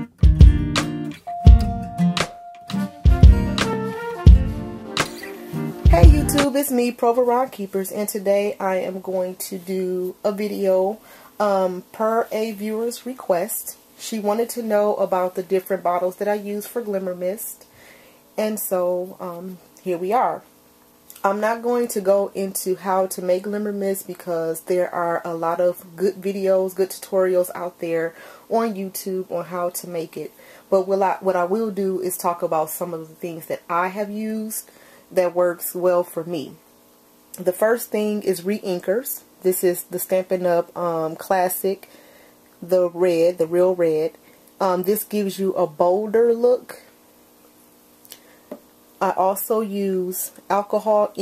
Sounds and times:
Speech: 5.9 - 17.7, 18.4 - 20.5, 21.1 - 36.6, 37.4 - 41.9, 42.6 - 47.0, 49.0 - 51.2.

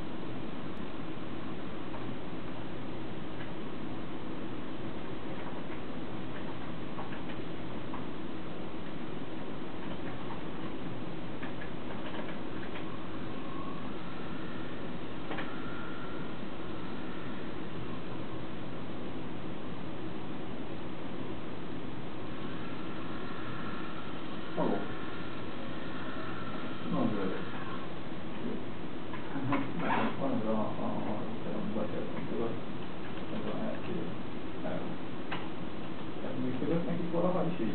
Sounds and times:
Speech: 24.6 - 24.9, 26.9 - 27.6, 29.4 - 32.6, 33.3 - 35.0, 36.2 - 37.7.

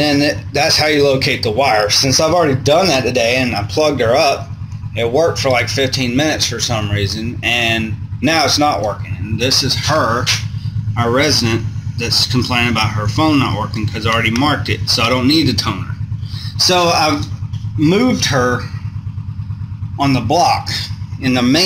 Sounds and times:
Speech: 0.0 - 18.8, 20.0 - 21.6.

